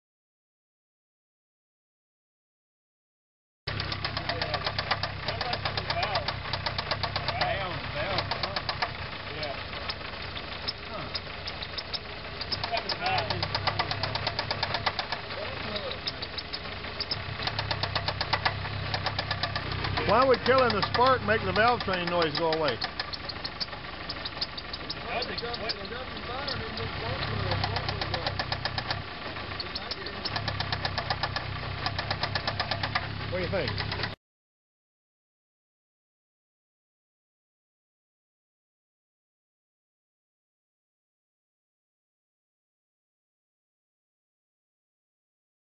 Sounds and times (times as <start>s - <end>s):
Idling: 3.7s - 34.2s
Medium engine (mid frequency): 3.7s - 34.2s
Speech: 5.3s - 6.3s, 7.3s - 8.7s, 9.3s - 9.7s, 10.9s - 11.2s, 12.6s - 13.6s, 15.3s - 16.3s, 20.0s - 22.8s, 25.0s - 28.4s, 29.6s - 30.4s, 33.3s - 33.8s.